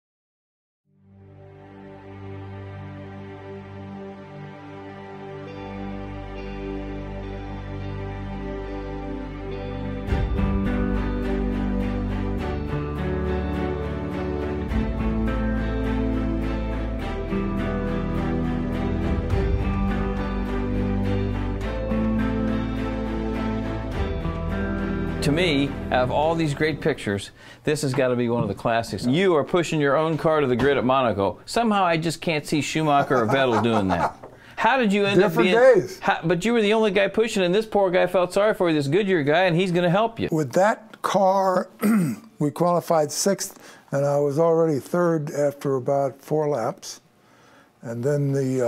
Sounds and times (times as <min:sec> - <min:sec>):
Music: 0:00.9 - 0:31.2, 0:32.8 - 0:40.3
Speech: 0:25.2 - 0:41.8, 0:42.4 - 0:47.0, 0:47.8 - 0:48.6.